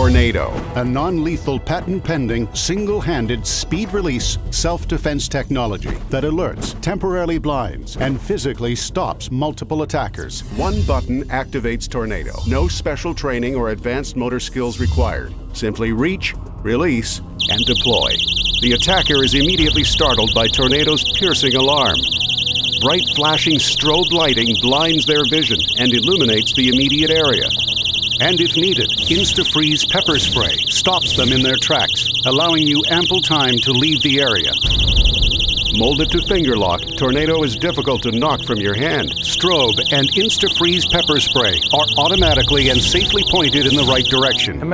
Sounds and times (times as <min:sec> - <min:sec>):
Speech: 0:00.0 - 0:22.0, 0:22.8 - 0:27.5, 0:28.2 - 0:34.6, 0:35.8 - 0:44.7
Music: 0:00.0 - 0:44.7.